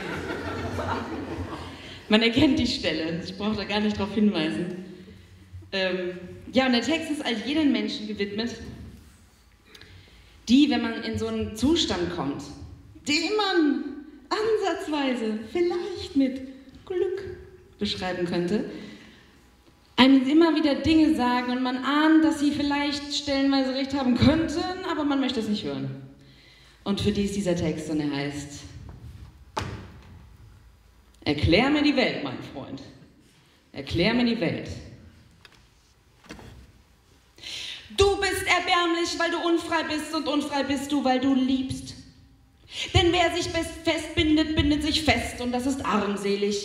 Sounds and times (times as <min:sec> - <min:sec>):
Speech: 0:02.1 - 0:04.9, 0:05.7 - 0:08.8, 0:10.5 - 0:18.7, 0:20.0 - 0:26.0, 0:26.9 - 0:28.8, 0:31.2 - 0:33.0, 0:33.7 - 0:35.0, 0:38.0 - 0:42.0, 0:42.9 - 0:46.6.